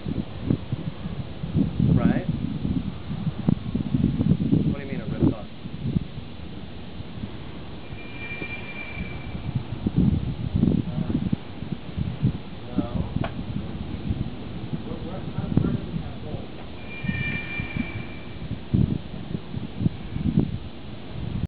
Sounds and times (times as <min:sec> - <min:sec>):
Speech: 0:02.0 - 0:02.3, 0:04.7 - 0:05.5, 0:12.7 - 0:13.1, 0:14.8 - 0:16.6.